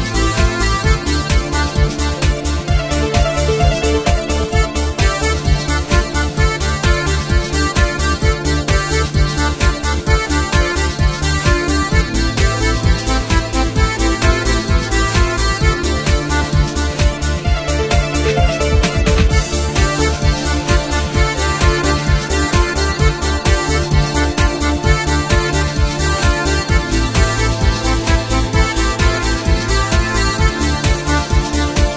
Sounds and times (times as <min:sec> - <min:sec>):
Techno: 0:00.0 - 0:31.9.